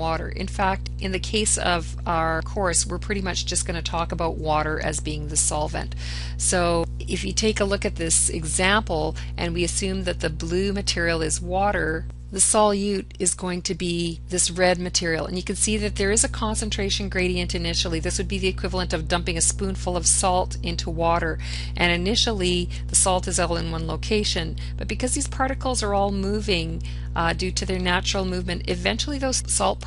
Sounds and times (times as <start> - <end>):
Speech: 0.0 - 29.8.